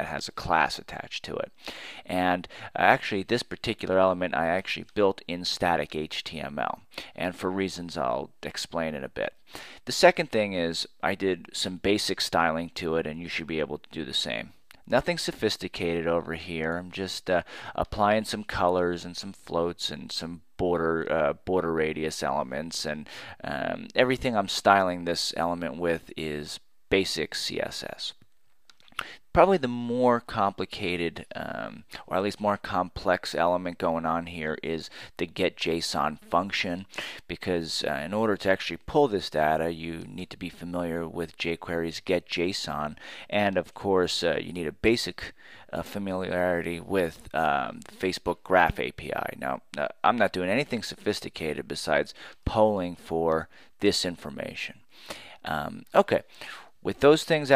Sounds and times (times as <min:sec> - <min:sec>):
Narration, monologue: 0:00.0 - 0:57.5.